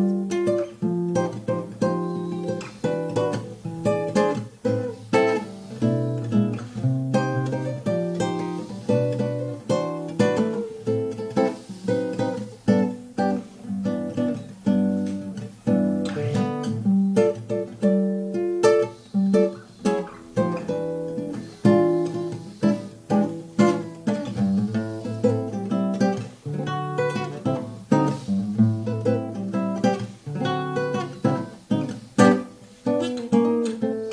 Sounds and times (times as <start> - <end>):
Acoustic guitar: 0.0 - 34.1.